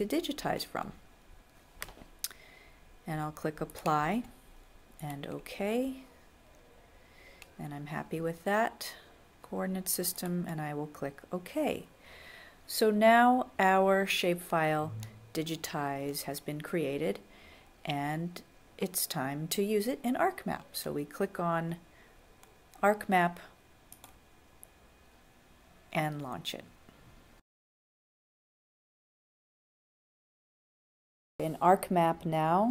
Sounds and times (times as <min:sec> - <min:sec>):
Speech: 0:00.0 - 0:01.0, 0:03.1 - 0:04.3, 0:05.0 - 0:06.1, 0:07.6 - 0:11.9, 0:12.7 - 0:17.2, 0:17.9 - 0:21.8, 0:22.8 - 0:23.5, 0:25.9 - 0:26.7, 0:31.4 - 0:32.7.